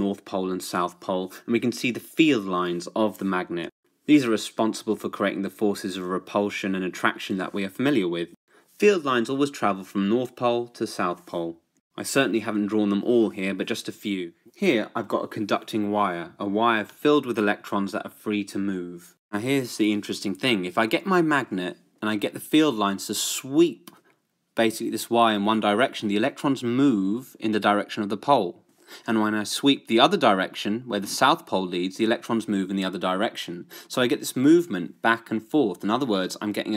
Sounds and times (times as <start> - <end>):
Narration, monologue: 0.0 - 36.7.